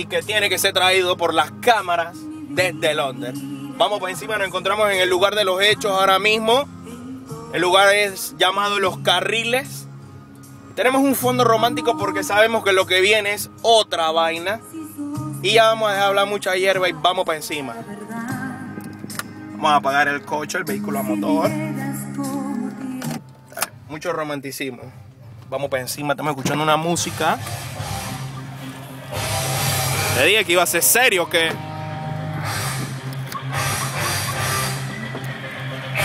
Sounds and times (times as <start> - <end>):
Music: 0.0 - 36.0.